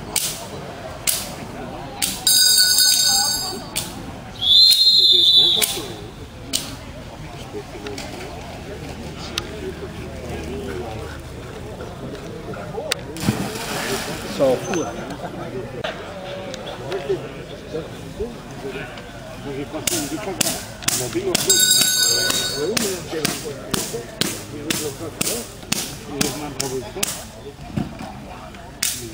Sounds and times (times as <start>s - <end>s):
Speech: 0.0s - 29.1s.